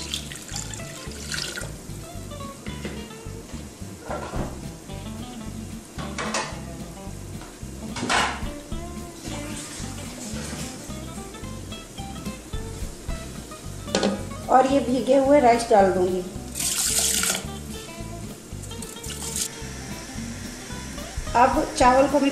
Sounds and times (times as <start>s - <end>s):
Dishes, pots, and pans: 6.0s - 6.6s, 8.0s - 8.4s, 13.9s - 14.2s.